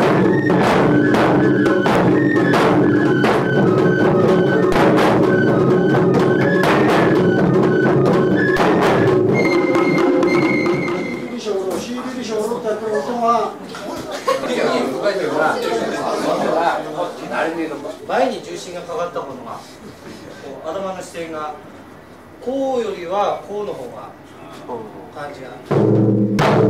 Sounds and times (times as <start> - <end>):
Speech: 11.2 - 21.7, 22.4 - 25.7.